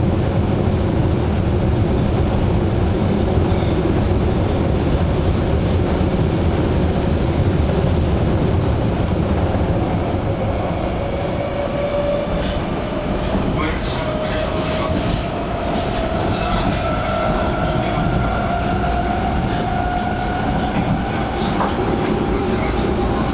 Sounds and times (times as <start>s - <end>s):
Subway, metro, underground: 0.0s - 23.3s
Train: 0.0s - 23.3s.